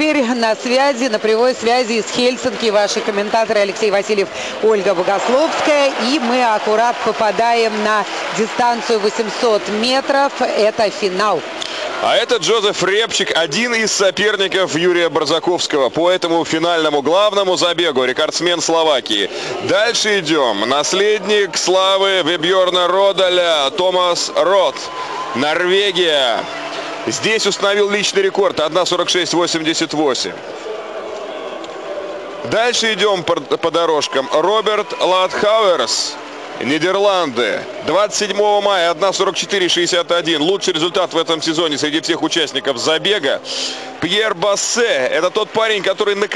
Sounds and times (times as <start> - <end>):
Inside, public space: 0.0 - 46.3.